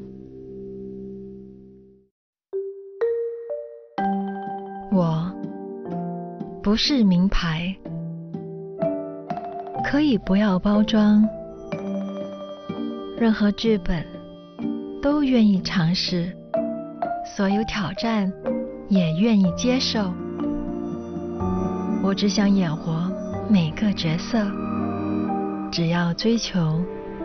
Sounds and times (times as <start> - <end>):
Music: 0.0 - 27.2
Speech: 4.9 - 5.4, 6.6 - 7.8, 9.9 - 11.3, 13.2 - 14.1, 15.0 - 16.4, 17.3 - 20.2, 22.0 - 24.6, 25.7 - 26.9.